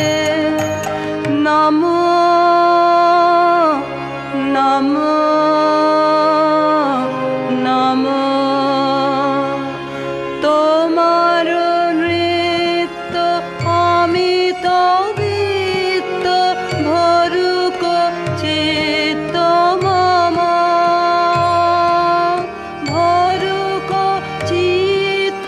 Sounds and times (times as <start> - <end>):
Carnatic music: 0.0 - 25.4.